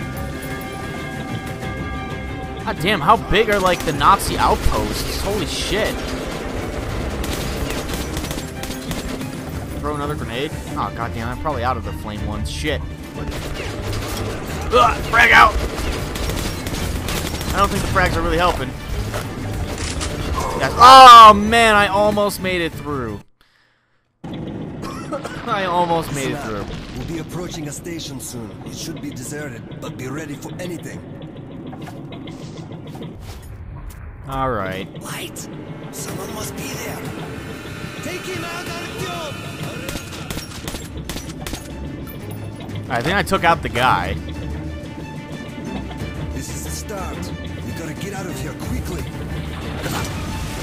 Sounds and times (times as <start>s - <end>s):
Music: 0.0s - 23.3s, 24.4s - 50.6s
Speech: 25.4s - 31.0s, 34.3s - 37.1s, 42.9s - 44.2s.